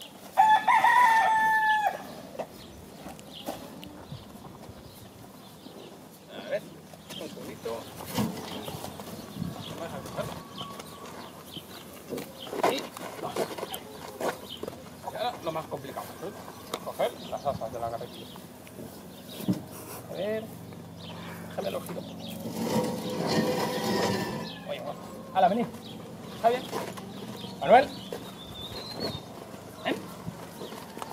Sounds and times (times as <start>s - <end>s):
Livestock, farm animals, working animals: 0.0s - 31.1s.